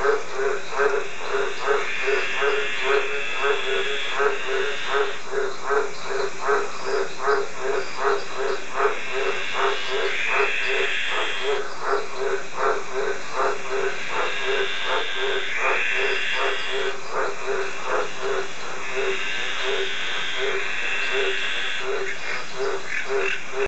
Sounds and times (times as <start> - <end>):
Croak: 0.0 - 23.6.